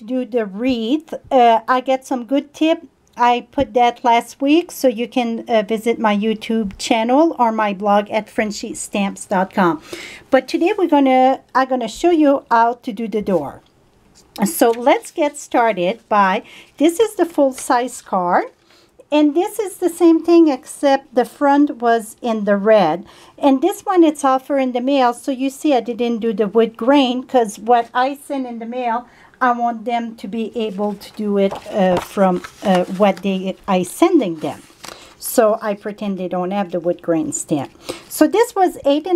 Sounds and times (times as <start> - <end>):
Speech: 0.0 - 13.6, 14.4 - 34.6, 35.2 - 39.1.